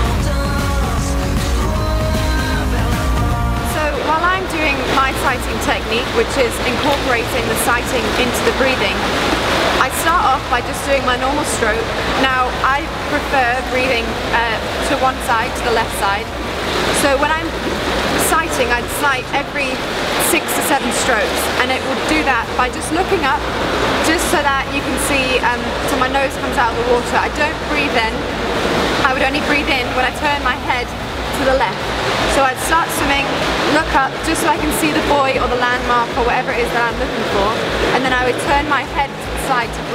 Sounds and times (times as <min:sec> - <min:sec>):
Speech: 0:03.6 - 0:09.0, 0:09.8 - 0:16.3, 0:17.0 - 0:17.6, 0:18.2 - 0:23.4, 0:24.0 - 0:28.2, 0:29.0 - 0:39.9.